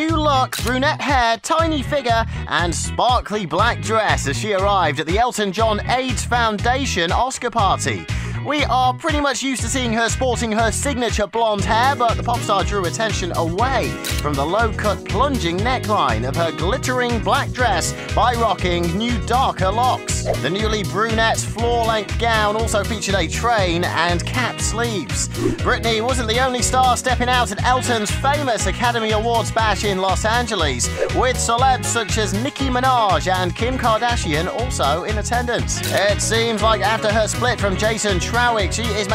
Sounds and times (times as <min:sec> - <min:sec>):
Music: 0:00.0 - 0:39.1
Speech: 0:00.0 - 0:39.1.